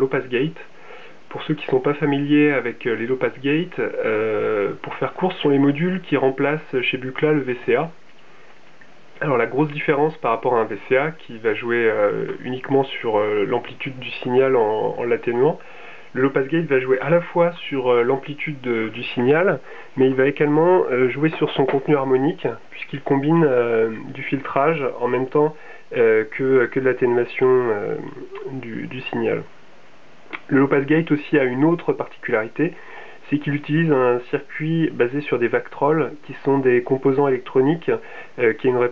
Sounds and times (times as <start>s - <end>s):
Speech: 0.0s - 0.7s, 1.3s - 8.0s, 9.2s - 29.5s, 30.3s - 38.9s.